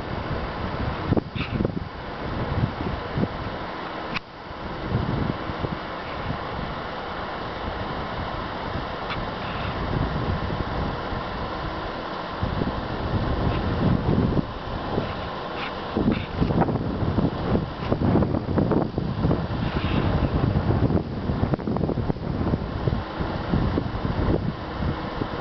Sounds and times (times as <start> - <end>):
Wind noise (microphone): 0.0 - 3.7, 4.5 - 25.4.